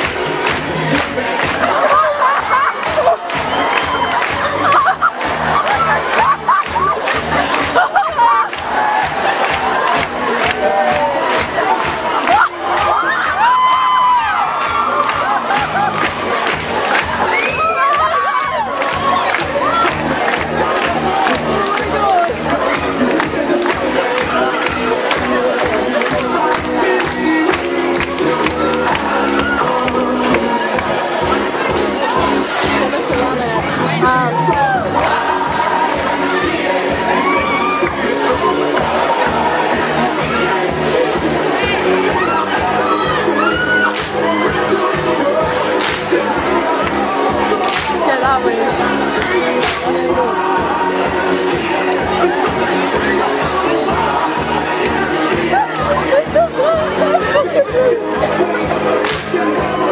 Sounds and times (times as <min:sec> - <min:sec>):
Music: 0:00.0 - 0:59.9.